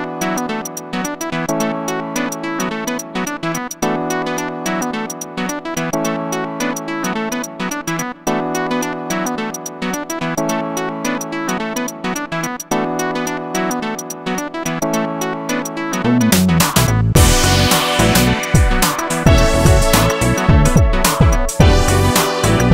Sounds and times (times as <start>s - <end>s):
Music: 0.0s - 22.7s.